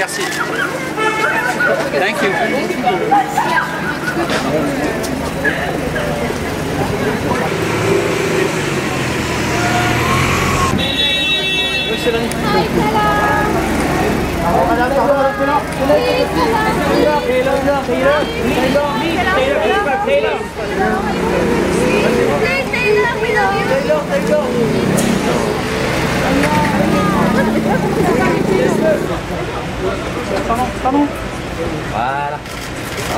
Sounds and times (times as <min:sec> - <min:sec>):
Car: 0:02.9 - 0:33.1.